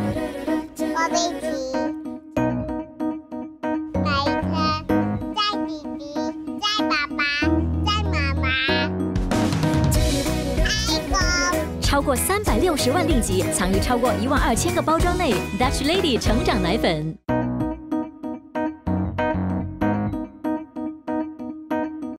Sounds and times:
Music: 0:00.0 - 0:22.1
Speech: 0:10.9 - 0:17.2.

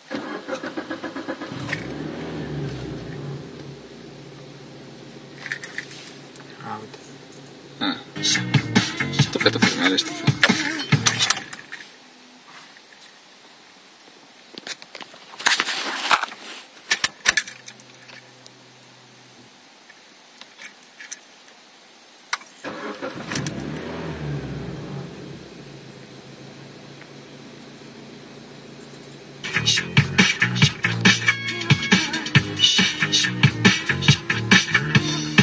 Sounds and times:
Engine starting: 0:00.0 - 0:03.4, 0:22.6 - 0:25.2
Vehicle: 0:00.0 - 0:09.9, 0:15.5 - 0:19.9, 0:22.6 - 0:31.4
Music: 0:08.2 - 0:11.4, 0:29.4 - 0:35.4.

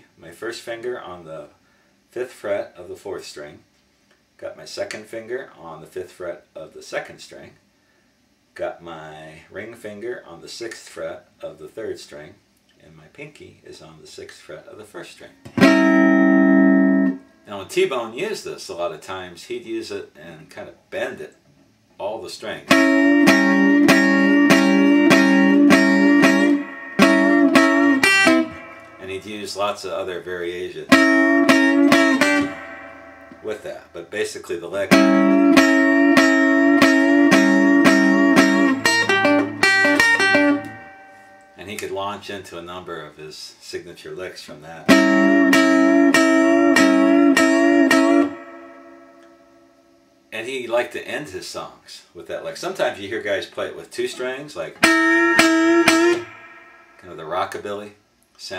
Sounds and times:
Speech: 0:00.0 - 0:03.7, 0:04.4 - 0:07.6, 0:08.6 - 0:15.4, 0:17.5 - 0:21.4, 0:22.0 - 0:22.7, 0:29.0 - 0:30.9, 0:33.4 - 0:35.0, 0:41.6 - 0:44.9, 0:50.3 - 0:54.8, 0:57.0 - 0:58.5
Acoustic guitar: 0:22.7 - 0:29.1, 0:34.9 - 0:41.6, 0:44.9 - 0:49.3.

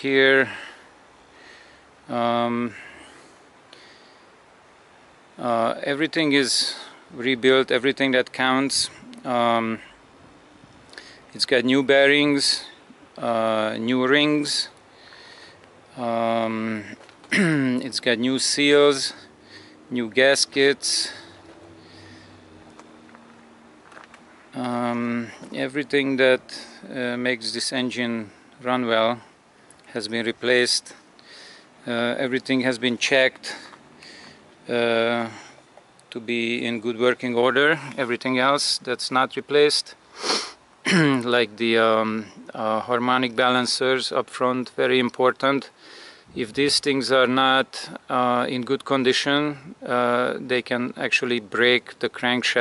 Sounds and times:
Speech: 0:00.0 - 0:00.6, 0:02.1 - 0:02.8, 0:05.4 - 0:09.9, 0:11.4 - 0:14.8, 0:16.0 - 0:19.2, 0:19.9 - 0:21.3, 0:24.6 - 0:29.2, 0:29.9 - 0:31.0, 0:31.8 - 0:33.7, 0:34.7 - 0:35.4, 0:36.1 - 0:40.0, 0:40.9 - 0:45.7, 0:46.4 - 0:52.6.

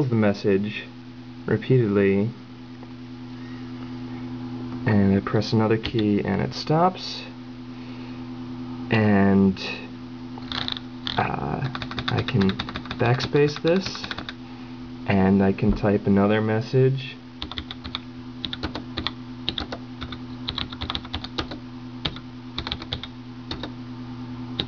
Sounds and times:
Speech: 0:00.0 - 0:02.4, 0:04.8 - 0:07.4, 0:08.9 - 0:10.0, 0:11.2 - 0:14.2, 0:15.1 - 0:17.2
Computer keyboard: 0:10.4 - 0:14.4, 0:17.4 - 0:23.7.

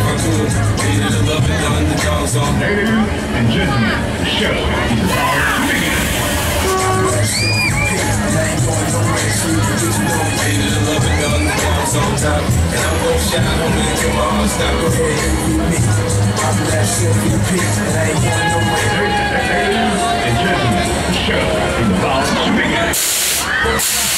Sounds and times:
Music: 0:00.0 - 0:22.4
Speech: 0:00.0 - 0:24.1.

